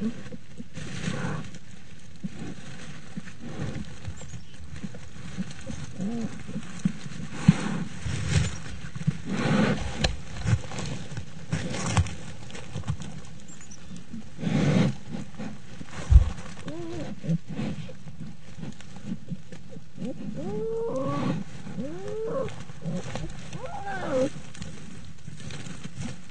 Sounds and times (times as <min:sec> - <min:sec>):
Roar: 0:20.0 - 0:24.4.